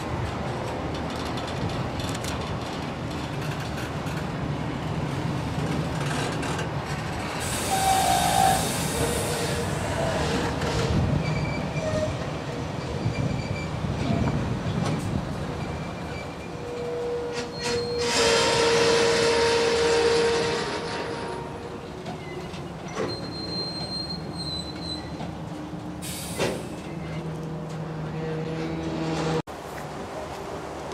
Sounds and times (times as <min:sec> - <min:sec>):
Railroad car, train wagon: 0:00.0 - 0:30.9
Train: 0:00.0 - 0:30.9
Train wheels squealing: 0:07.4 - 0:12.2, 0:12.8 - 0:14.4, 0:15.5 - 0:25.3.